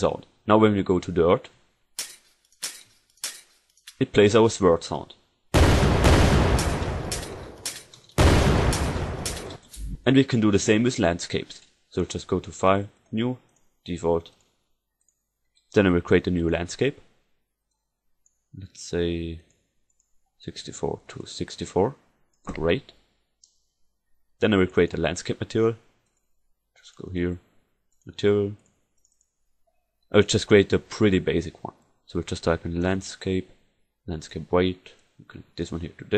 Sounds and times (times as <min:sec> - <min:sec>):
Speech: 0:00.0 - 0:01.6, 0:04.0 - 0:05.2, 0:10.0 - 0:14.3, 0:15.8 - 0:17.0, 0:18.6 - 0:19.5, 0:20.4 - 0:23.0, 0:24.4 - 0:25.9, 0:26.8 - 0:27.5, 0:28.1 - 0:28.6, 0:30.1 - 0:36.1
Fusillade: 0:05.6 - 0:09.6.